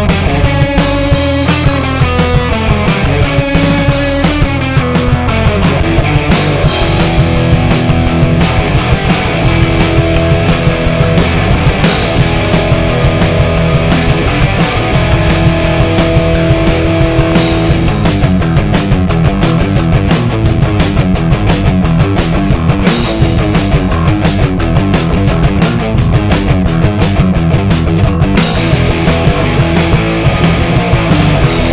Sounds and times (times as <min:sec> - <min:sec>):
Music: 0:00.0 - 0:31.7.